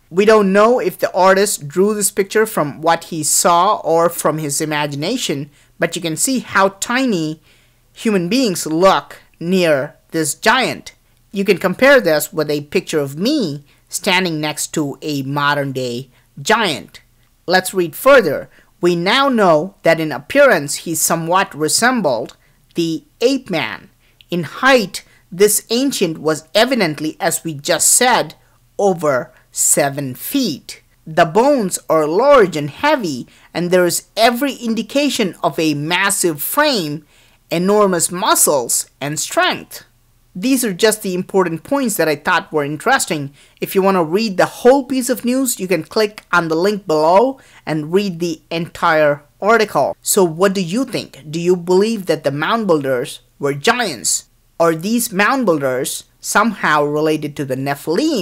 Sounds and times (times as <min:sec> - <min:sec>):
Narration, monologue: 0:00.0 - 0:58.2.